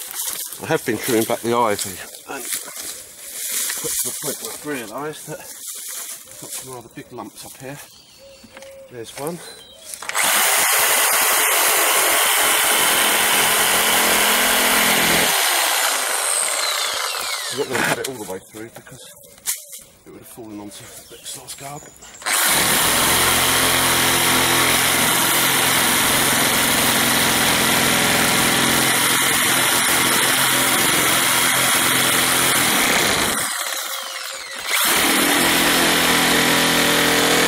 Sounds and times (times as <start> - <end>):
Light engine (high frequency): 22.3 - 37.4.